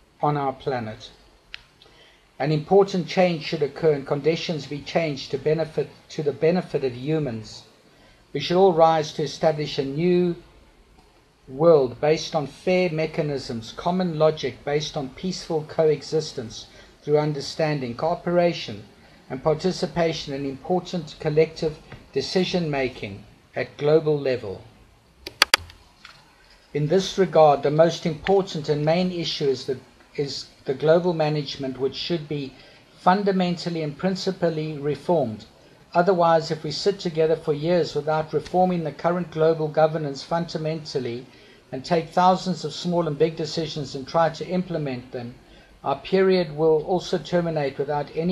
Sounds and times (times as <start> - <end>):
Narration, monologue: 0.0 - 48.3
Male speech, man speaking: 0.2 - 1.2, 2.4 - 7.7, 8.4 - 10.4, 11.5 - 24.7, 26.8 - 48.3.